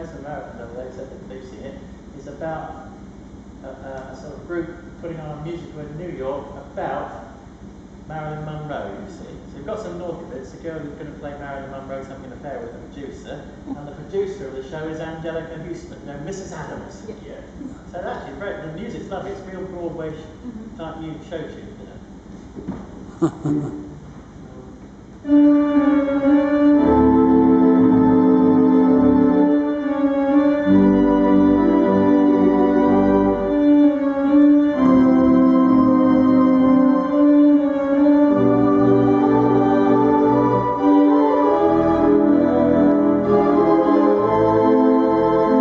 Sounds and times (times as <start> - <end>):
Speech: 0.0 - 3.0, 3.6 - 7.4, 8.1 - 22.0.